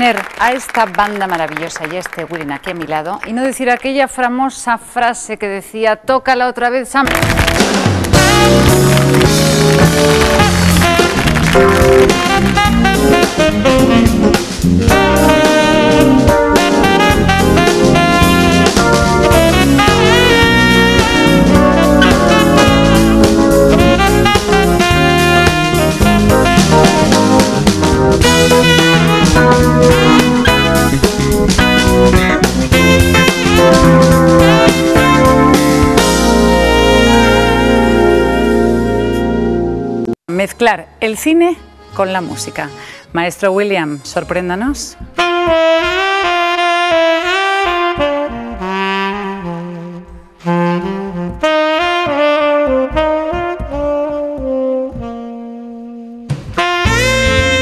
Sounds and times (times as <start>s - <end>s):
Speech: 0.0s - 7.1s, 40.3s - 45.0s
Exciting music: 7.1s - 40.1s, 56.6s - 57.6s.